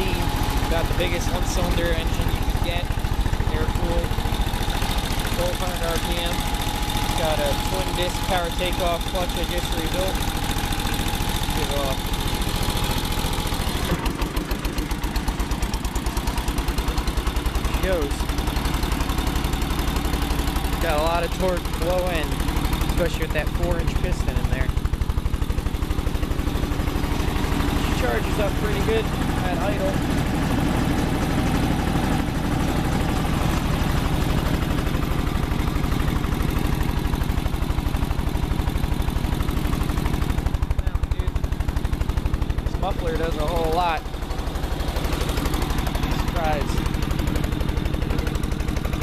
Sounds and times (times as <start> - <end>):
Speech: 0.0 - 4.1, 5.3 - 6.4, 7.1 - 10.2, 11.5 - 12.0, 17.7 - 18.3, 20.8 - 24.8, 27.8 - 30.0, 40.8 - 41.4, 42.7 - 44.1, 46.1 - 46.8.